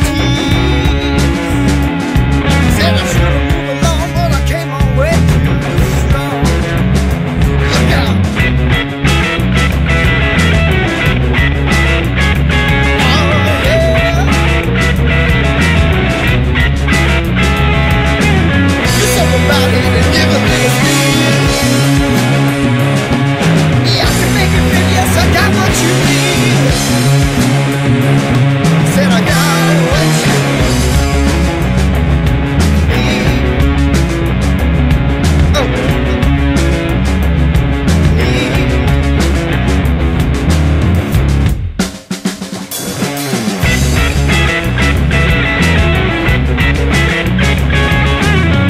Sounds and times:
Singing: 0:00.0 - 0:01.7, 0:18.9 - 0:21.8, 0:23.8 - 0:26.9, 0:28.8 - 0:30.7, 0:38.1 - 0:38.9
Bass guitar: 0:00.0 - 0:48.6
Drum: 0:00.0 - 0:48.6
Grunge: 0:00.0 - 0:48.6.

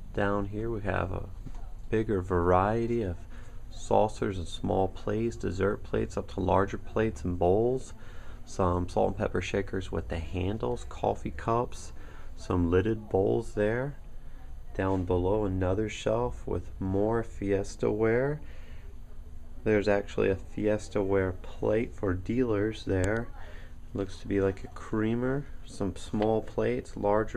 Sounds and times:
Speech: 0:00.0 - 0:27.3.

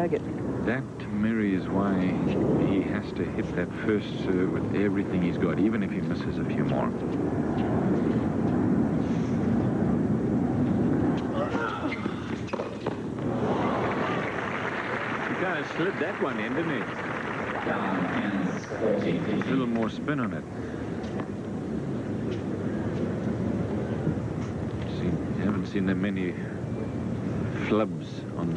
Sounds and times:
Speech: 0:00.0 - 0:07.0, 0:15.4 - 0:16.9, 0:17.6 - 0:20.4, 0:27.6 - 0:28.5
Outside, urban or manmade: 0:00.0 - 0:28.5.

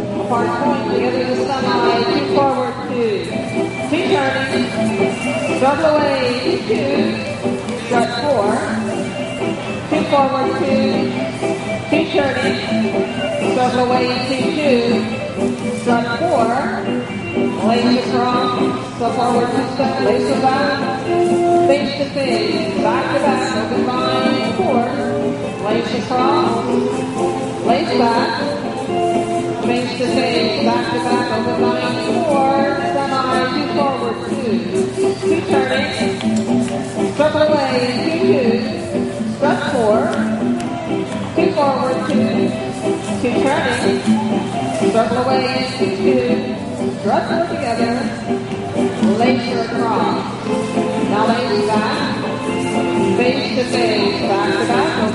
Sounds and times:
Speech: 0:00.2 - 0:04.8, 0:05.6 - 0:08.9, 0:09.9 - 0:11.2, 0:11.9 - 0:12.8, 0:13.5 - 0:15.1, 0:15.9 - 0:17.0, 0:17.6 - 0:21.0, 0:21.7 - 0:26.8, 0:27.6 - 0:28.6, 0:29.6 - 0:36.2, 0:37.2 - 0:40.4, 0:41.4 - 0:42.6, 0:43.2 - 0:44.1, 0:44.9 - 0:48.3, 0:49.0 - 0:50.4, 0:51.1 - 0:52.3, 0:53.2 - 0:55.1.

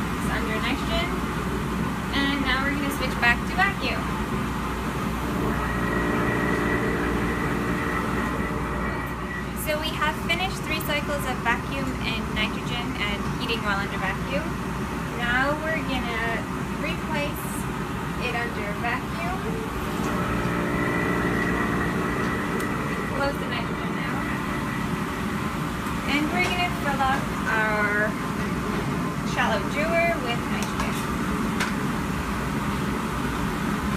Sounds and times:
Speech: 0:15.2 - 0:17.6, 0:18.2 - 0:19.5, 0:26.1 - 0:28.2, 0:29.3 - 0:31.1.

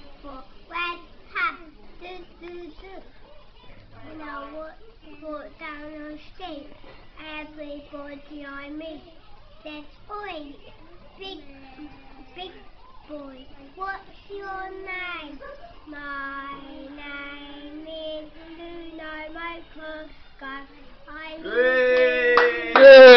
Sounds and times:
Child singing: 0:11.2 - 0:21.6.

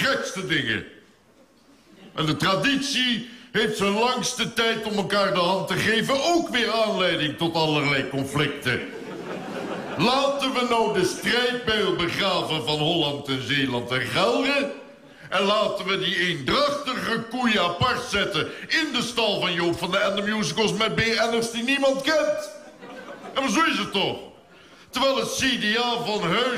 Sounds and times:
Male speech, man speaking: 0:00.0 - 0:01.0, 0:02.2 - 0:09.0, 0:10.0 - 0:22.6, 0:23.4 - 0:24.3, 0:24.9 - 0:26.5
Narration, monologue: 0:00.0 - 0:26.5.

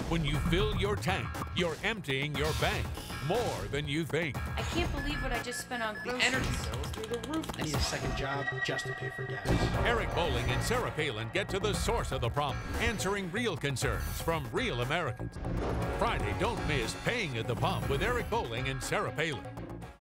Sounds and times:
Music: 0:00.0 - 0:20.0.

